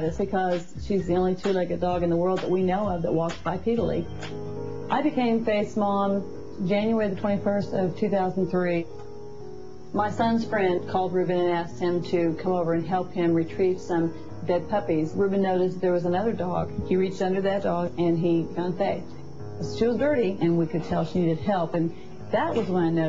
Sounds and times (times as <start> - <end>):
Music: 0.0 - 23.0.